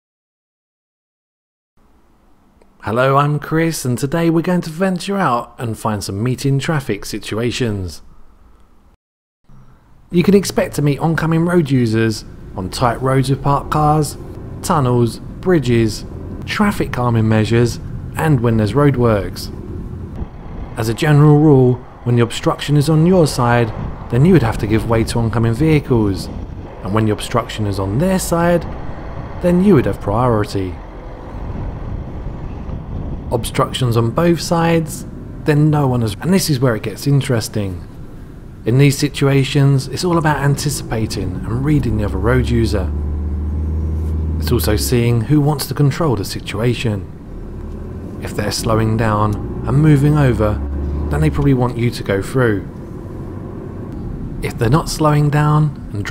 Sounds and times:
Speech: 0:02.8 - 0:08.0, 0:10.1 - 0:19.6, 0:20.8 - 0:28.7, 0:29.4 - 0:30.8, 0:33.3 - 0:37.9, 0:38.7 - 0:43.0, 0:44.4 - 0:47.1, 0:48.2 - 0:52.7, 0:54.4 - 0:56.1.

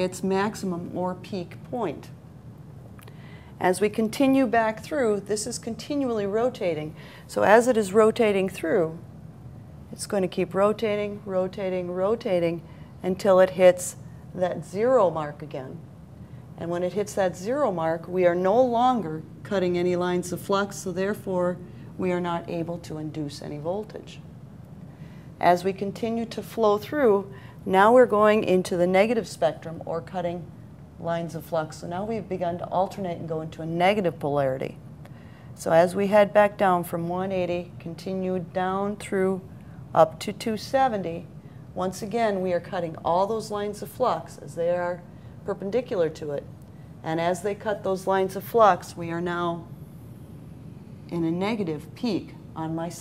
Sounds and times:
Speech: 0:00.0 - 0:02.2, 0:03.6 - 0:09.0, 0:09.9 - 0:15.8, 0:16.6 - 0:24.2, 0:25.4 - 0:34.8, 0:35.6 - 0:49.7, 0:51.1 - 0:53.0.

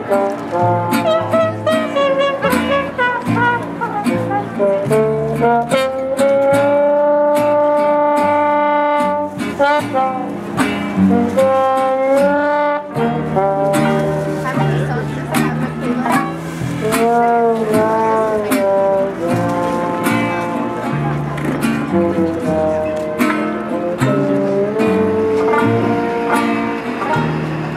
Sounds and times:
Music: 0:00.0 - 0:27.7
Speech: 0:13.8 - 0:23.2.

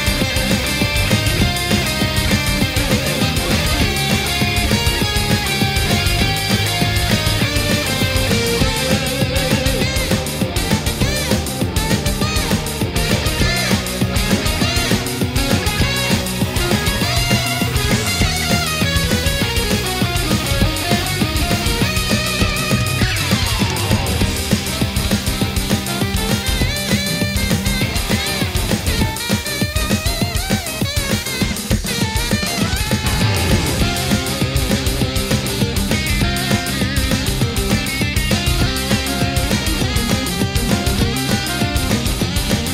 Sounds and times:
Theme music: 0:00.0 - 0:29.4, 0:32.5 - 0:42.7.

